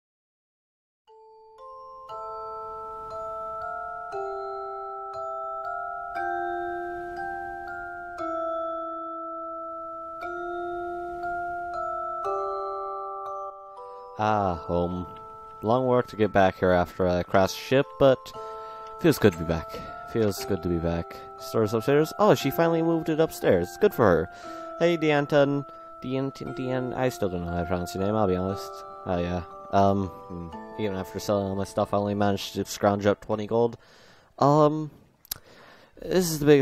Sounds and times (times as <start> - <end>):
Marimba, xylophone: 1.1 - 33.0
Glockenspiel: 1.1 - 36.6.